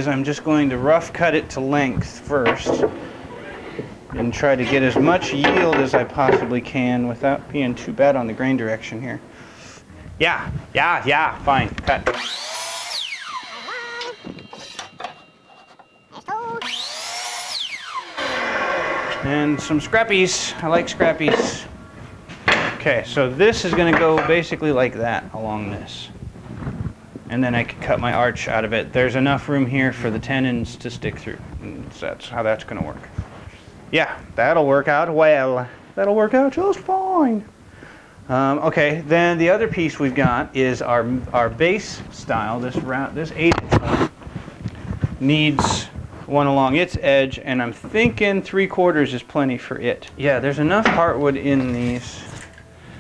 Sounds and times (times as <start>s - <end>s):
Speech: 0.0s - 9.2s, 10.2s - 12.1s, 19.2s - 21.8s, 22.8s - 26.2s, 27.3s - 33.2s, 33.9s - 37.5s, 38.3s - 43.7s, 45.2s - 52.4s
Drill: 12.1s - 14.9s, 16.6s - 19.3s.